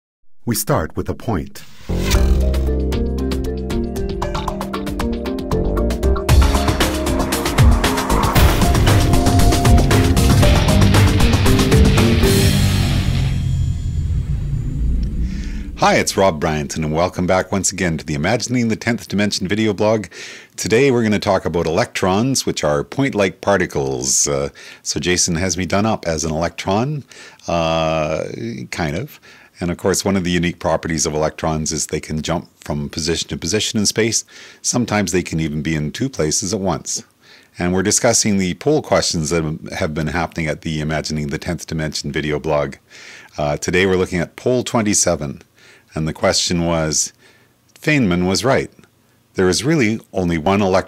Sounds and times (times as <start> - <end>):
Speech: 0.4 - 1.7, 15.8 - 42.8, 43.4 - 47.2, 47.8 - 48.8, 49.4 - 50.8
Music: 1.6 - 15.0.